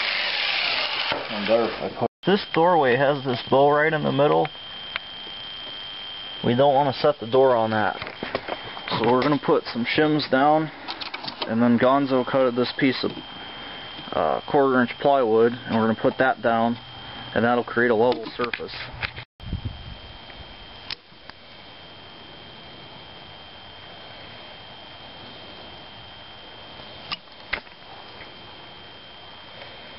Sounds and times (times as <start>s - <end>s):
Speech: 1.3s - 4.5s, 6.4s - 8.0s, 8.9s - 10.7s, 11.4s - 13.2s, 14.1s - 16.8s, 17.4s - 18.9s.